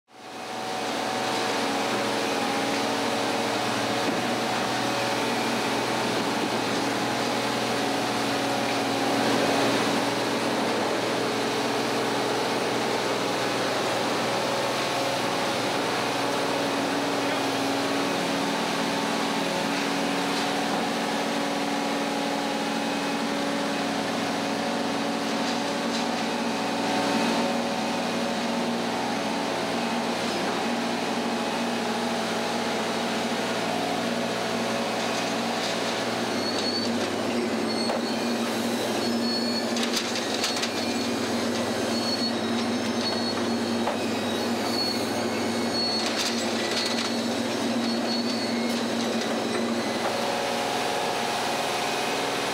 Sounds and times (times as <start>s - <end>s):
Railroad car, train wagon: 0.2s - 52.5s
Train: 0.2s - 52.5s.